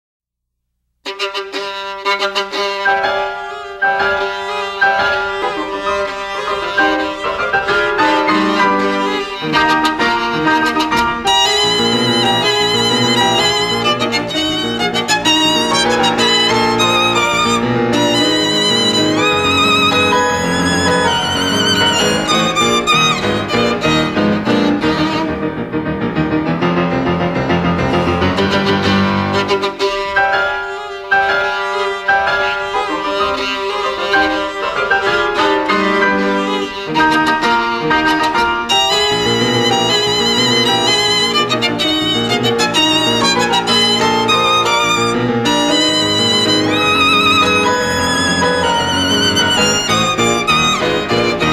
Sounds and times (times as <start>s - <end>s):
Violin, fiddle: 1.0s - 26.2s, 27.5s - 51.5s
Classical music: 1.0s - 51.5s.